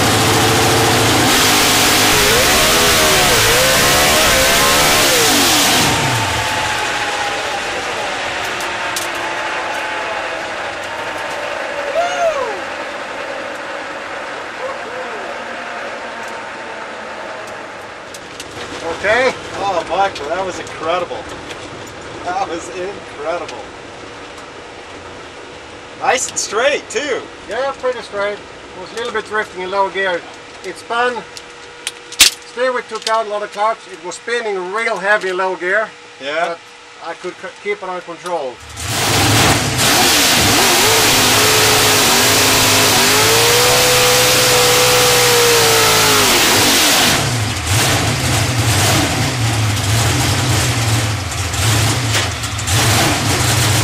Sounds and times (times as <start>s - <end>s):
Speech: 18.8s - 21.2s, 22.2s - 23.7s, 26.0s - 31.3s, 32.5s - 38.6s.